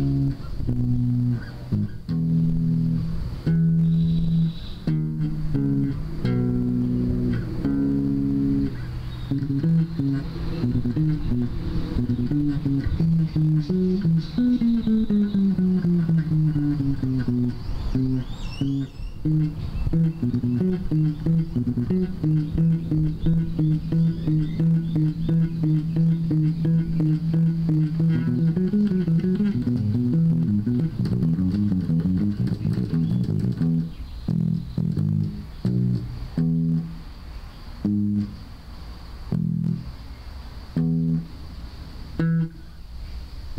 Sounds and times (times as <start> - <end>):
Electric guitar: 0.0 - 37.1, 37.8 - 38.6, 39.3 - 40.1, 40.7 - 42.9.